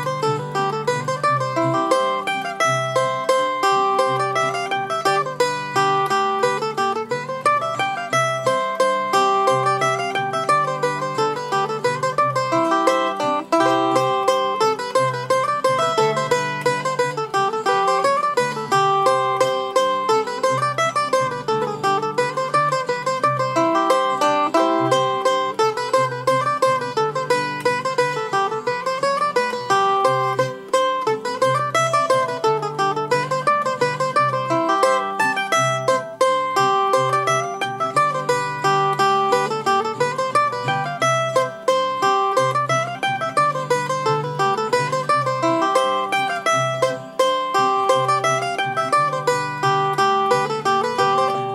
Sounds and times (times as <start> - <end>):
Mandolin: 0.0 - 51.5.